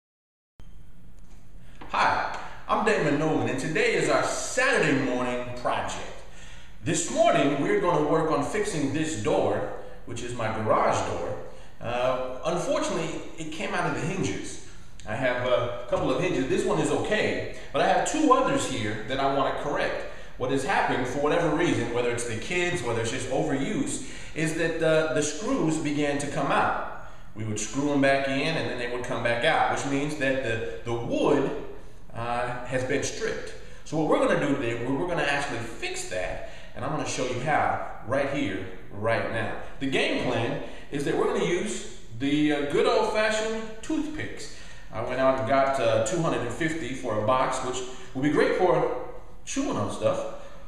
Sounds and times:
Speech: 1.8 - 50.4.

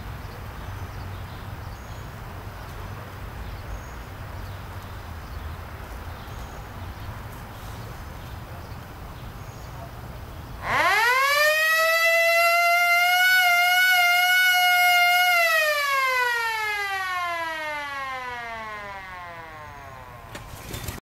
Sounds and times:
Civil defense siren: 10.6 - 20.4.

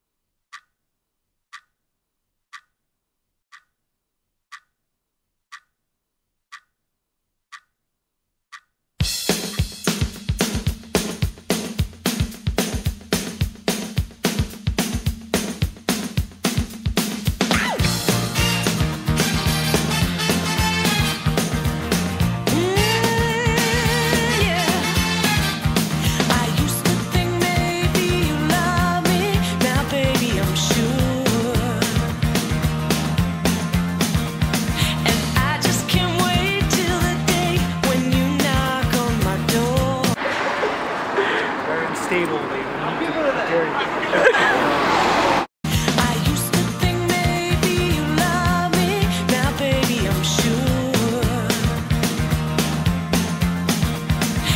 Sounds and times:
Music: 9.0 - 40.2, 45.7 - 54.5.

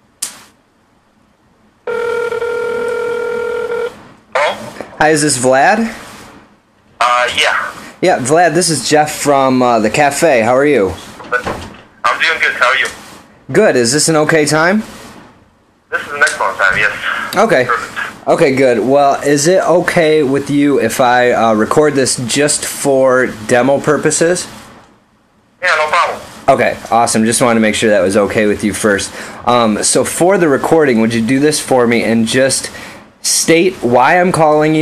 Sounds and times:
Speech: 4.4 - 6.0, 7.0 - 14.9, 15.9 - 24.5, 25.6 - 34.8.

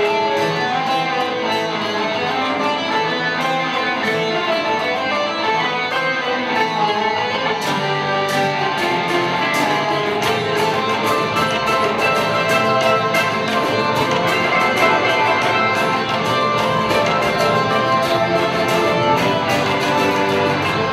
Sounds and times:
Blues: 0.0 - 20.9.

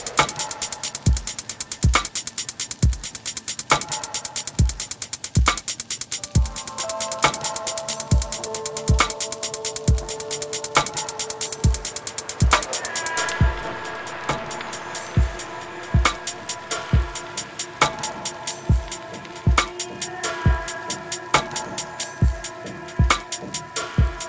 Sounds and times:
Music: 0.0 - 24.2.

